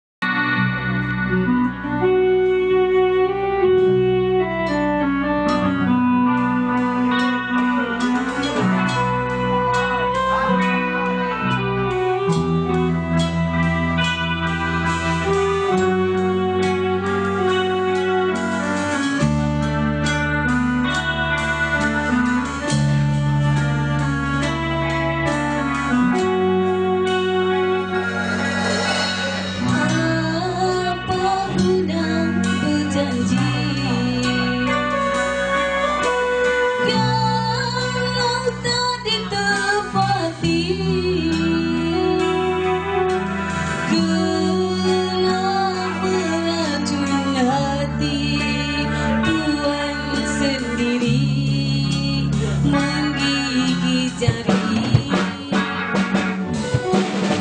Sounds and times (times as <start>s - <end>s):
Electric guitar: 0.2s - 57.4s
Inside, large room or hall: 0.2s - 57.4s.